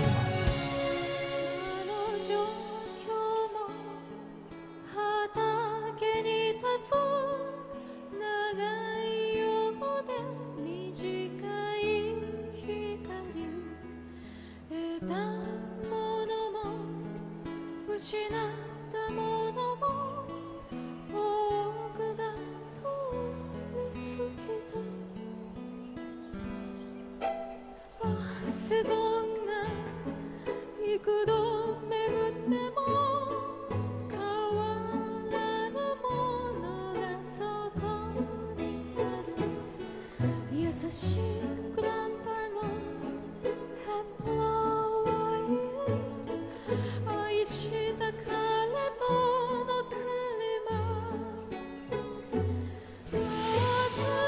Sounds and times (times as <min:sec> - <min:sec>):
Music: 0:00.0 - 0:54.2.